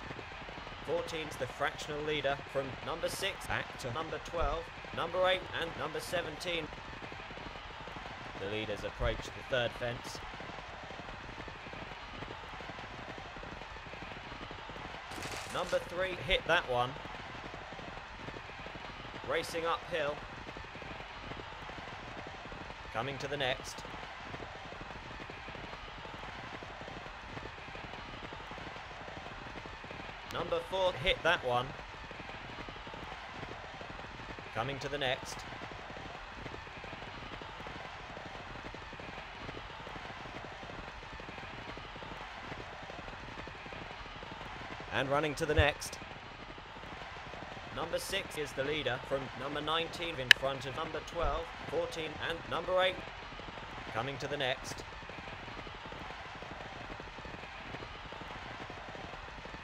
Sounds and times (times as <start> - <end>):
Clip-clop: 0.0 - 59.6
Speech: 0.9 - 6.7, 8.4 - 10.2, 15.5 - 17.0, 19.3 - 20.2, 23.0 - 23.8, 30.3 - 31.8, 34.6 - 35.4, 45.0 - 46.0, 47.8 - 53.0, 54.0 - 54.8.